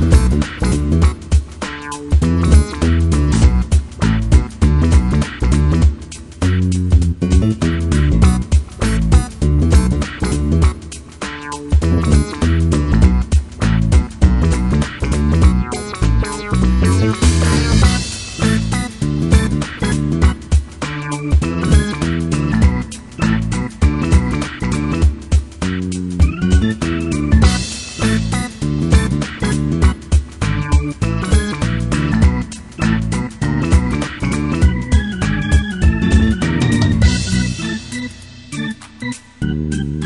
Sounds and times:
Music: 0.0s - 40.0s.

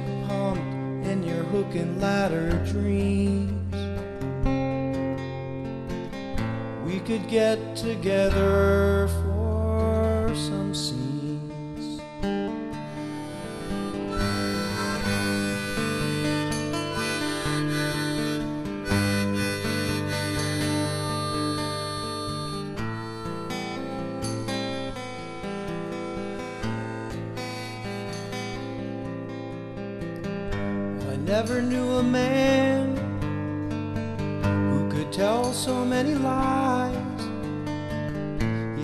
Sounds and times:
Harmonica: 12.8s - 28.9s
Wind instrument, woodwind instrument: 13.0s - 28.7s.

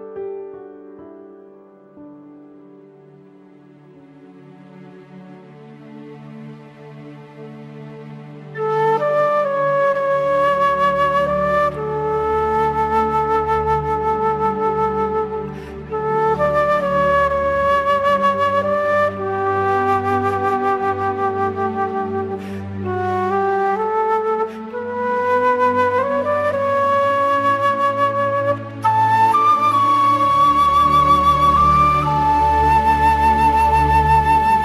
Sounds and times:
Flute: 1.8s - 34.6s.

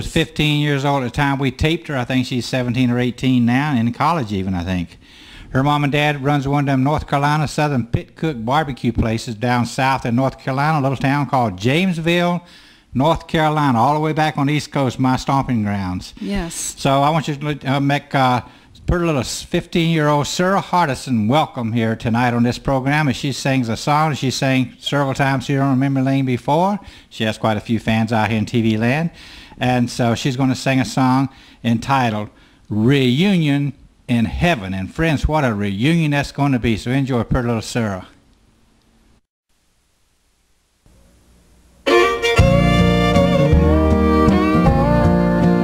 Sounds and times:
Speech: 0.0s - 5.0s, 5.6s - 38.2s.

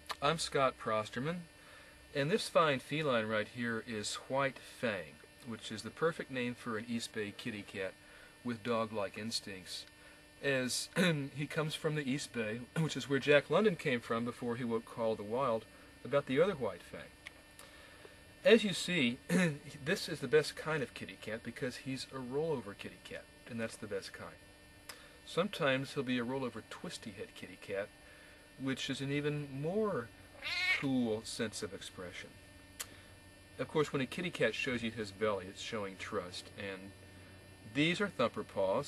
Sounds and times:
Speech: 0.1s - 1.5s, 2.2s - 17.2s, 18.4s - 24.4s, 25.3s - 27.9s, 28.6s - 30.1s, 30.8s - 32.4s, 33.6s - 37.0s, 37.7s - 38.8s
Cat: 30.4s - 30.9s.

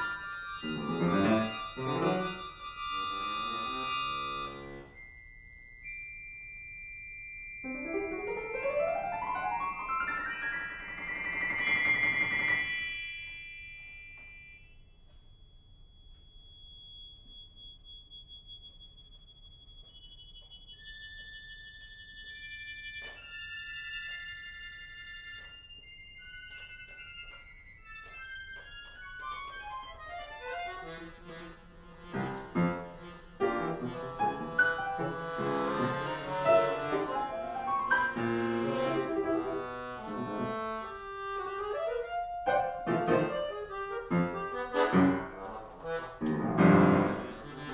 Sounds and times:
Accordion: 0.0s - 6.5s, 7.7s - 13.0s, 22.0s - 47.7s.

